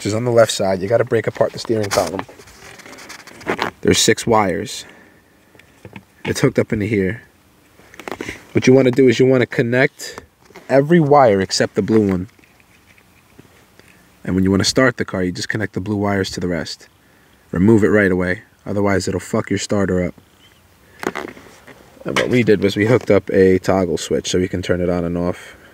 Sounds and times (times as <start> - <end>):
Speech: 0.0 - 2.3, 3.8 - 4.9, 6.2 - 7.3, 8.5 - 12.3, 14.2 - 16.9, 17.5 - 20.2, 22.0 - 25.6.